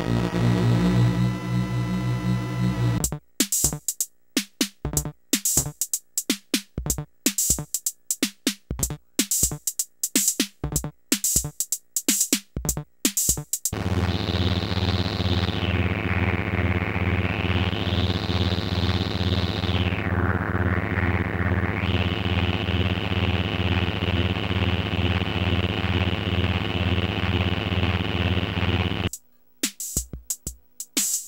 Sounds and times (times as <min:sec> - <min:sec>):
Music: 0:00.0 - 0:31.2.